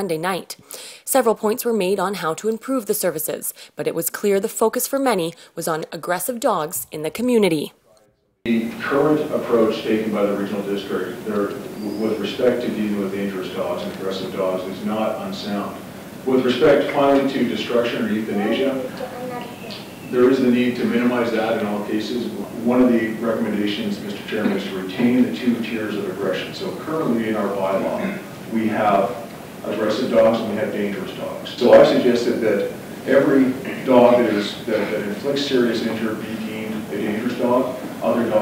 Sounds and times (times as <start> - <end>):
Speech: 0.0 - 38.4.